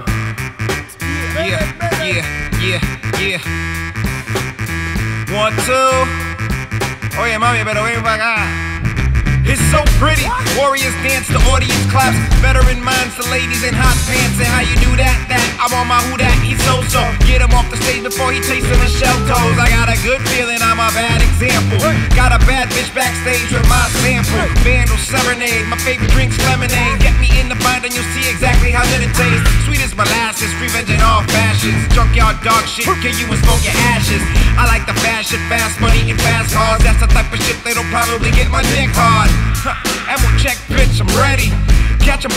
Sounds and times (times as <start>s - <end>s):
Music: 0.0s - 42.3s.